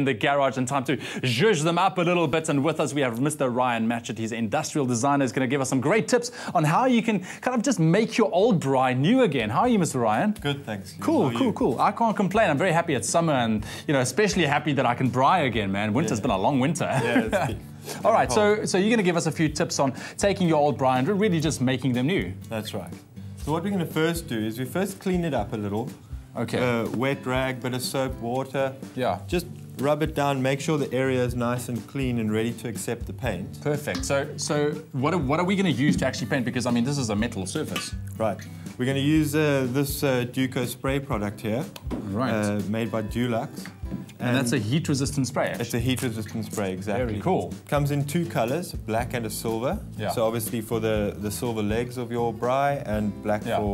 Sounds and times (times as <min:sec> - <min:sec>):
Music: 0:00.0 - 0:53.7
Speech: 0:00.0 - 0:53.7.